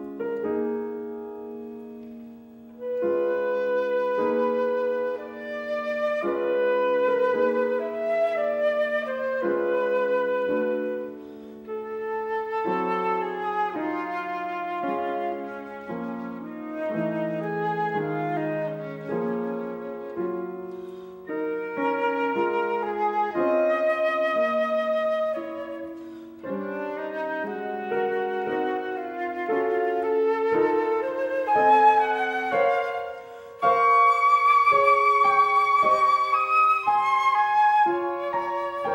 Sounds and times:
Flute: 0.0s - 38.9s.

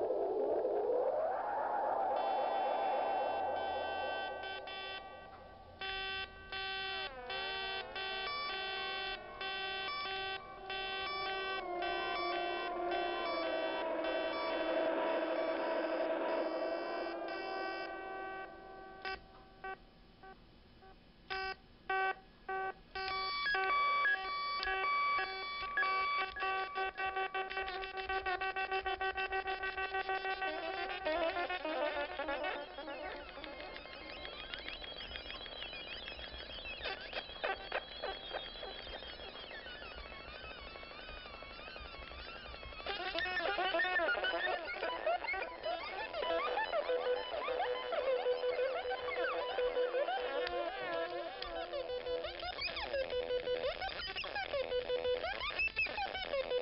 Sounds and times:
Music: 0.0s - 19.8s, 21.5s - 56.6s
Distortion: 0.0s - 56.6s.

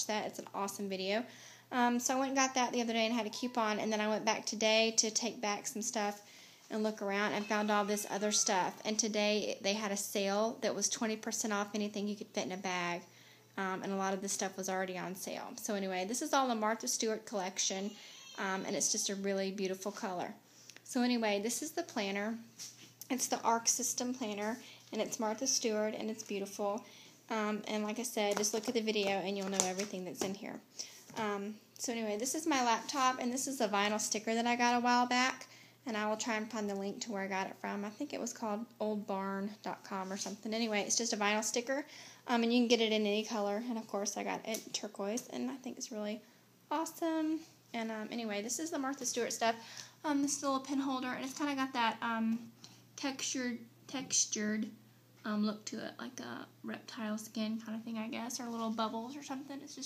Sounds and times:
Speech: 0.0s - 59.8s.

